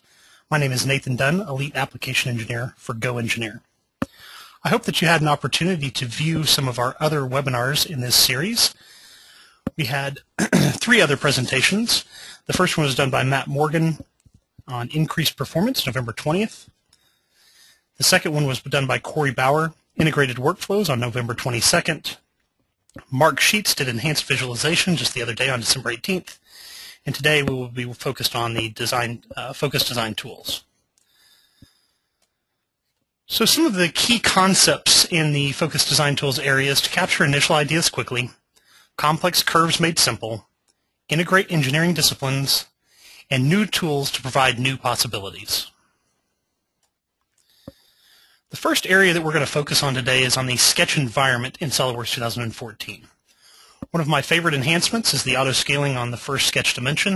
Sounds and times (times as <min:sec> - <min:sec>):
Speech: 0:00.0 - 0:09.0, 0:09.7 - 0:16.7, 0:18.0 - 0:22.2, 0:23.0 - 0:30.6, 0:33.3 - 0:38.4, 0:39.0 - 0:40.5, 0:41.1 - 0:45.8, 0:48.5 - 0:53.1, 0:53.8 - 0:57.1.